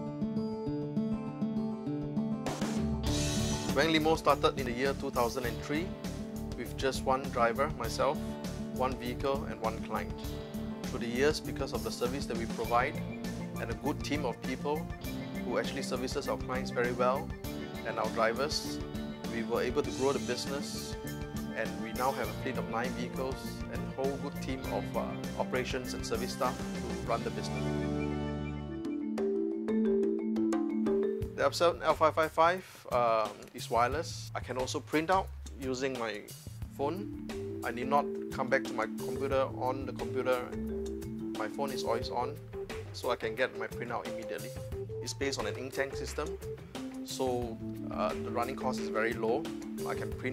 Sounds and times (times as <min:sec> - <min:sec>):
Music: 0:00.0 - 0:50.3
Speech: 0:03.7 - 0:05.9, 0:06.6 - 0:08.2, 0:08.8 - 0:10.2, 0:10.9 - 0:13.0, 0:13.6 - 0:14.8, 0:15.4 - 0:27.6, 0:31.4 - 0:40.6, 0:41.4 - 0:42.4, 0:43.0 - 0:46.3, 0:47.1 - 0:50.3.